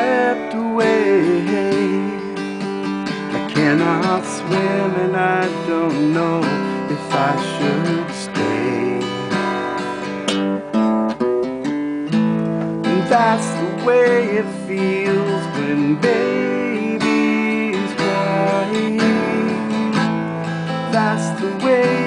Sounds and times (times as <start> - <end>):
Music: 0.0 - 22.0.